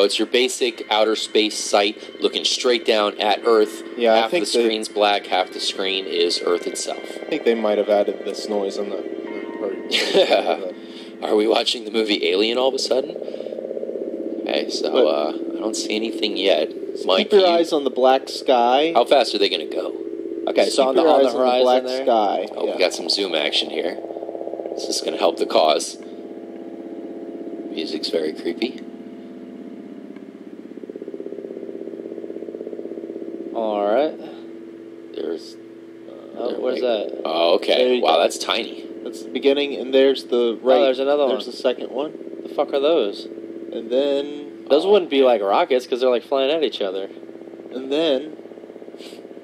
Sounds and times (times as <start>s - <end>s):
Speech: 0.0s - 9.0s, 9.6s - 13.2s, 14.5s - 24.0s, 24.8s - 26.0s, 27.8s - 28.8s, 33.6s - 34.4s, 35.2s - 47.1s, 47.8s - 48.4s
Music: 0.0s - 13.3s.